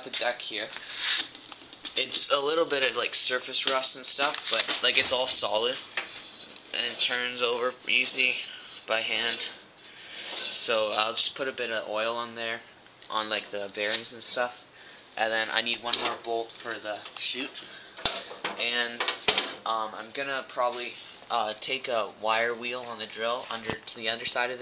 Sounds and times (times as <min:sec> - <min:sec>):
Speech: 0:00.0 - 0:00.8, 0:02.0 - 0:05.8, 0:06.7 - 0:09.6, 0:10.4 - 0:17.7, 0:18.6 - 0:24.6
Inside, small room: 0:00.0 - 0:24.6.